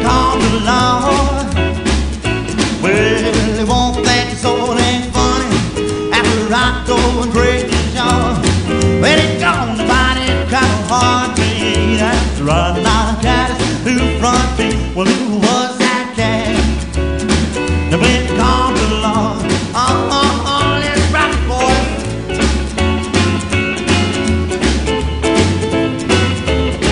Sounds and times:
Music: 0:00.0 - 0:26.9.

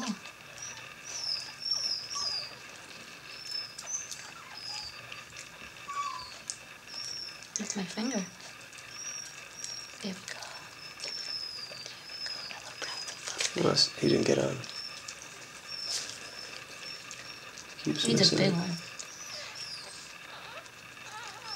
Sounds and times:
Dog: 0:00.0 - 0:21.5
Speech: 0:13.6 - 0:14.7, 0:17.9 - 0:18.8.

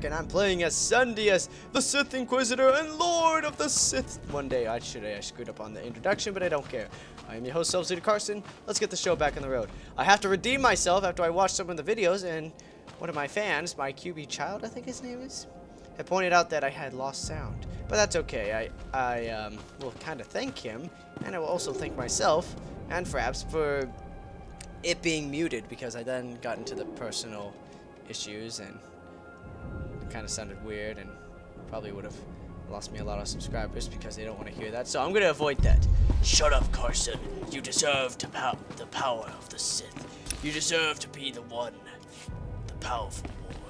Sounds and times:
Speech: 0:00.0 - 0:23.9, 0:24.8 - 0:27.5, 0:28.1 - 0:28.8, 0:30.0 - 0:31.1, 0:31.7 - 0:43.7
Music: 0:00.0 - 0:43.7.

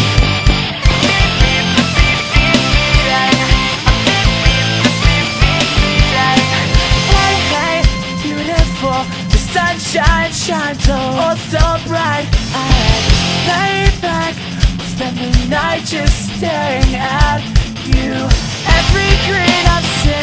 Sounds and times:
Music: 0:00.0 - 0:20.2.

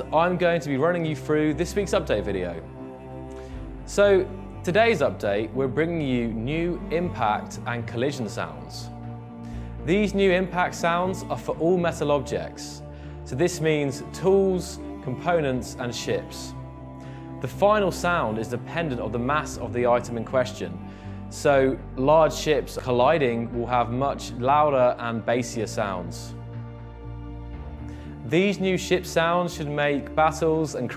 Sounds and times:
Speech: 0:00.0 - 0:02.7, 0:03.9 - 0:08.9, 0:09.8 - 0:16.6, 0:17.4 - 0:26.4, 0:28.2 - 0:30.9
Music: 0:00.0 - 0:30.9.

